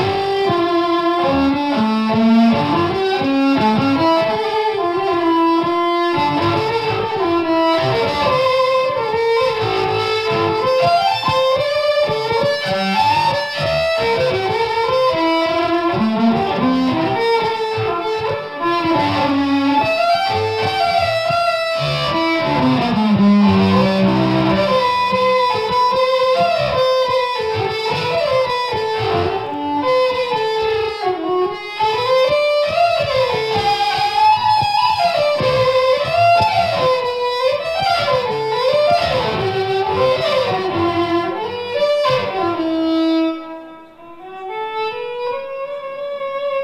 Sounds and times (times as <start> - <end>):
Violin, fiddle: 0.0 - 46.6.